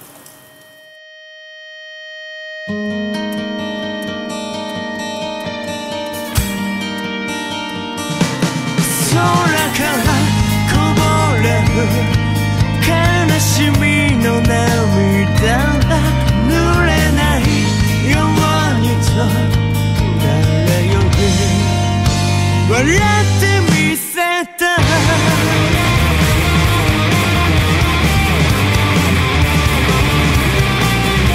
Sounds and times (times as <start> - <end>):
Music: 0.3 - 31.3.